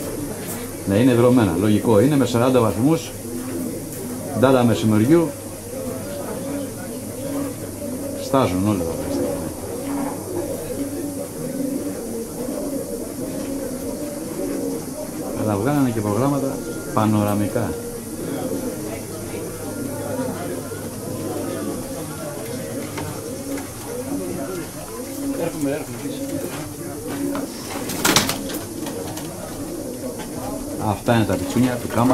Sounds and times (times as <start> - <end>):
Pigeon, dove: 0.0 - 32.1
Speech: 0.3 - 3.2, 4.2 - 9.6, 15.3 - 27.6, 30.2 - 32.1.